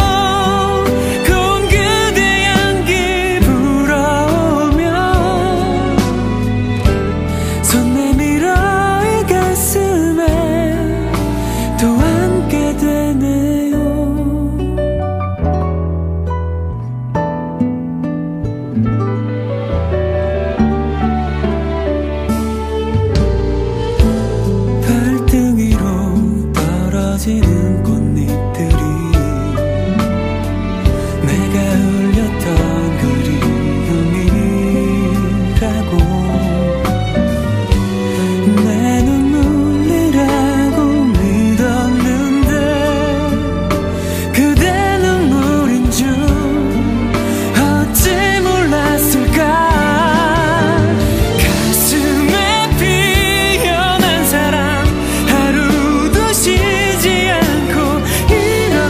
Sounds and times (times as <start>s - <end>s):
Tender music: 0.0s - 58.8s.